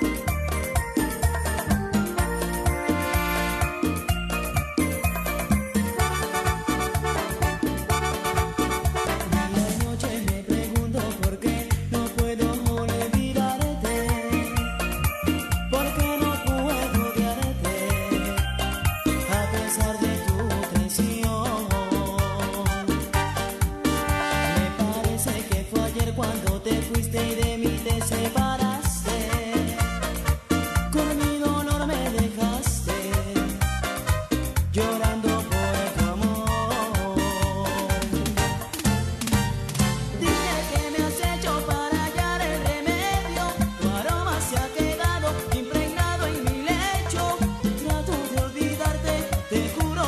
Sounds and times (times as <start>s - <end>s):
Music: 0.0s - 50.0s.